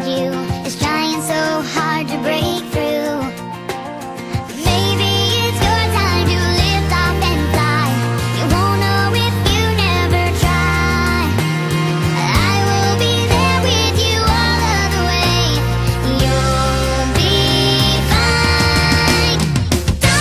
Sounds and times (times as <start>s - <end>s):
Music: 0.0s - 20.2s.